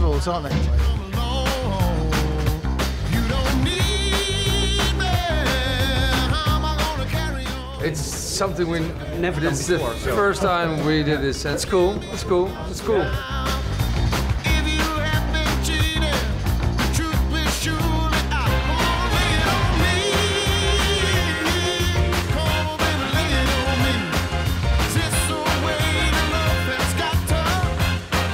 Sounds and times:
Speech: 0.0 - 0.9, 7.8 - 13.3
Music: 0.0 - 28.3.

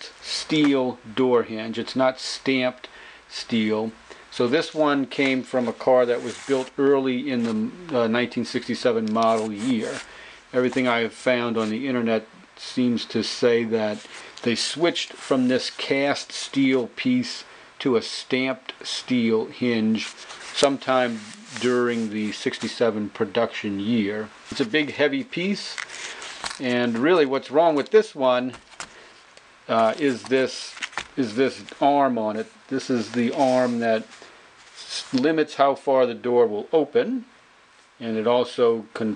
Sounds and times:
Speech: 0.0 - 25.8, 26.6 - 28.6, 29.7 - 34.1, 34.8 - 37.3, 38.0 - 39.1.

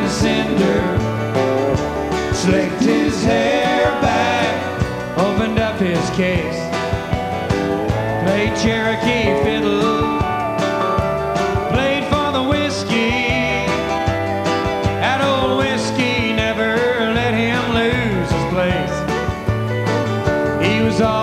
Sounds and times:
Musical instrument: 0.0 - 21.2.

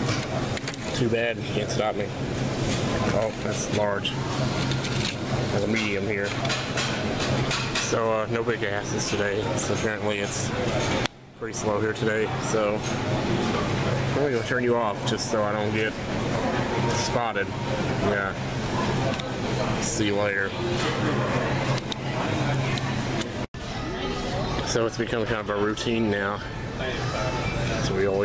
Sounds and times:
Speech: 7.8 - 10.6, 11.4 - 13.0, 14.1 - 15.9, 16.8 - 21.2.

